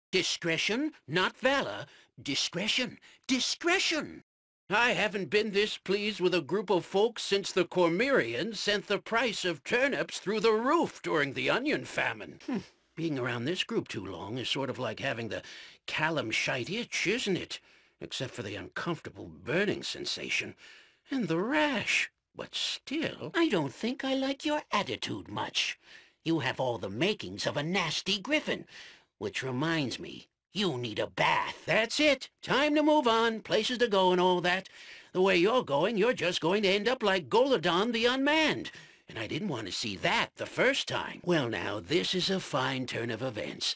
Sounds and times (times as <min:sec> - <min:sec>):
Speech: 0:00.1 - 0:43.7.